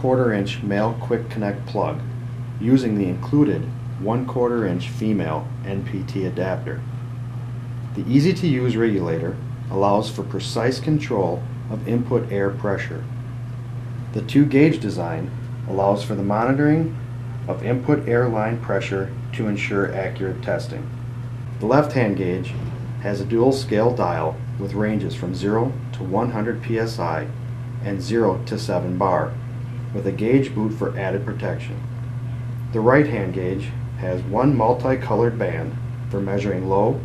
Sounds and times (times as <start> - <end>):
Speech: 0.0 - 6.9, 8.0 - 13.1, 14.1 - 20.9, 21.6 - 31.9, 32.7 - 37.0.